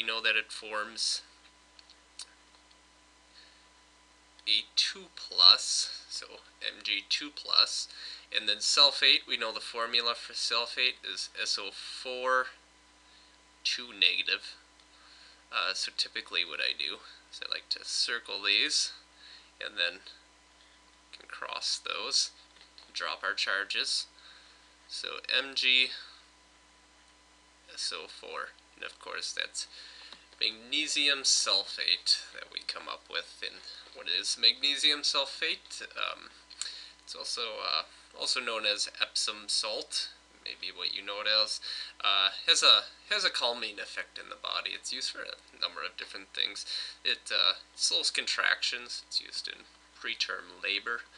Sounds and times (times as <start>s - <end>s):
Speech: 0.0s - 1.4s, 4.4s - 12.6s, 13.6s - 14.6s, 15.5s - 19.0s, 19.6s - 20.2s, 21.2s - 24.1s, 24.9s - 26.2s, 27.7s - 29.8s, 30.4s - 36.4s, 37.1s - 51.1s.